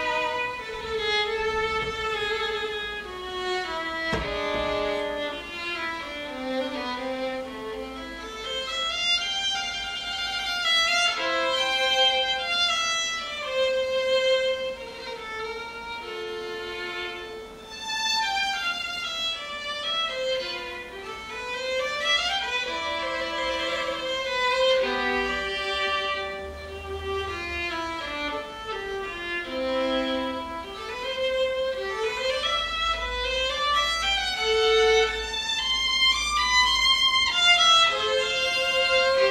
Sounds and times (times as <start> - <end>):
Violin, fiddle: 0.0 - 39.3.